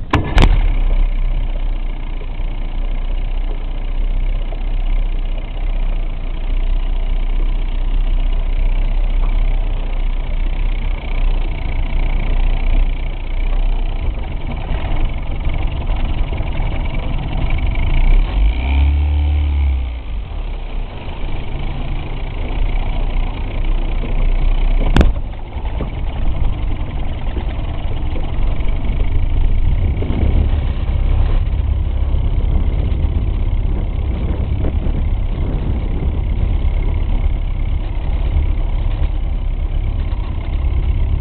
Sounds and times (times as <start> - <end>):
Motorboat, speedboat: 0.0 - 41.2.